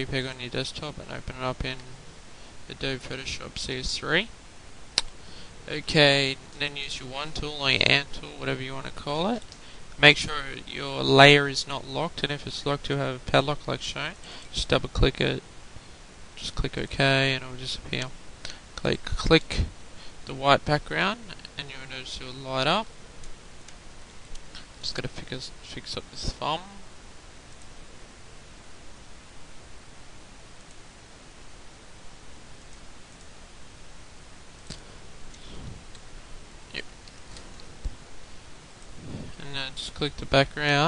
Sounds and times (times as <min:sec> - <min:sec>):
Speech: 0:00.0 - 0:02.0, 0:02.7 - 0:04.3, 0:05.7 - 0:15.4, 0:16.4 - 0:18.2, 0:18.8 - 0:19.7, 0:20.3 - 0:22.9, 0:24.8 - 0:26.8, 0:39.4 - 0:40.8.